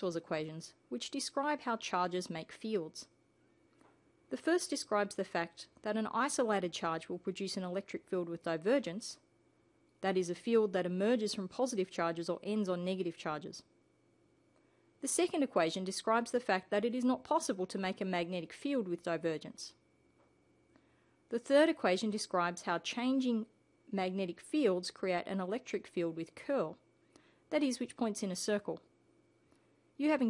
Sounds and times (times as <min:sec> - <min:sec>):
Speech: 0:00.0 - 0:03.1, 0:04.3 - 0:09.3, 0:10.0 - 0:13.7, 0:15.0 - 0:19.8, 0:21.3 - 0:26.8, 0:27.5 - 0:28.9, 0:30.0 - 0:30.3.